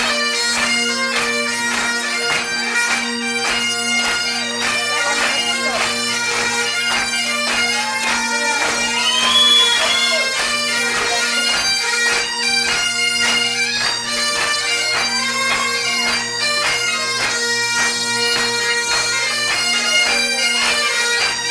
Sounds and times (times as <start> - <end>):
Bagpipes: 0.0 - 21.5
Wind instrument, woodwind instrument: 0.0 - 21.5.